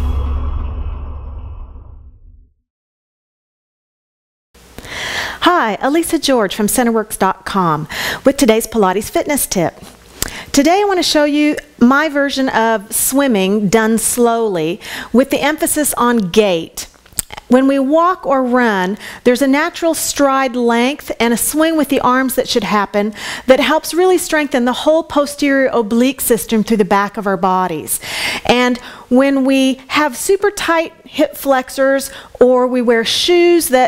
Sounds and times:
Speech: 5.4s - 9.8s, 10.6s - 33.8s.

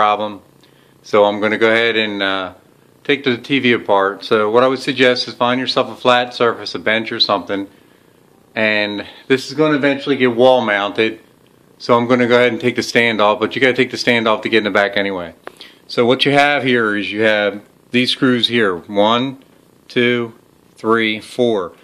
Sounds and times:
Speech: 0.0s - 0.4s, 1.0s - 7.7s, 8.6s - 11.2s, 11.8s - 21.8s.

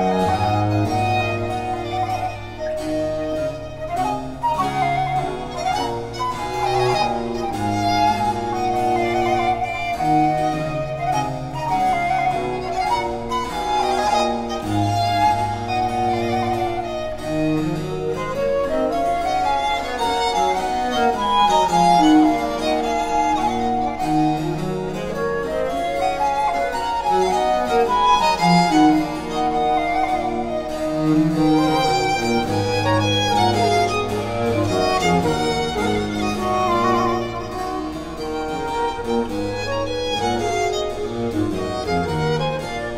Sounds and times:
Classical music: 0.0s - 42.9s
Piano: 0.0s - 42.9s
String section: 0.0s - 42.9s
Violin, fiddle: 0.0s - 42.9s.

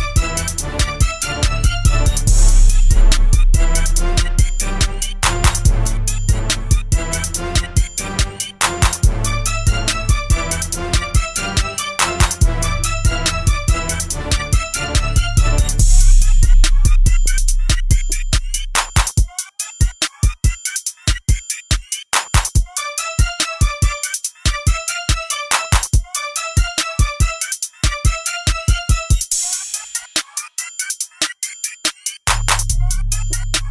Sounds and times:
Music: 0.0s - 33.7s.

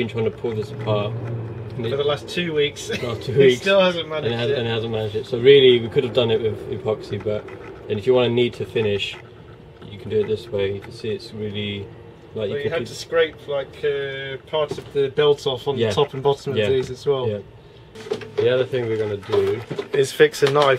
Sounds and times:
Speech: 0.0s - 1.1s, 1.8s - 9.2s, 9.8s - 17.4s, 18.4s - 20.7s.

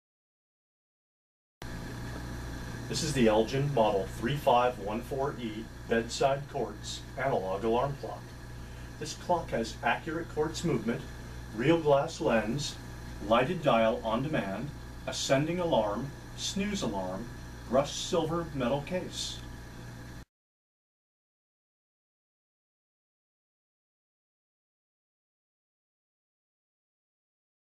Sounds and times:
Speech: 2.9s - 8.3s, 9.0s - 19.5s.

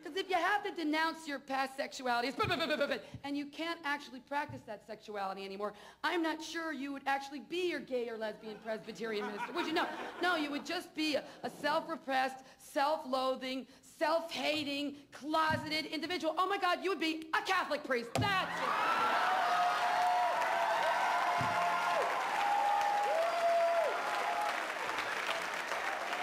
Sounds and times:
Speech: 0.0s - 18.5s
Applause: 18.7s - 26.2s.

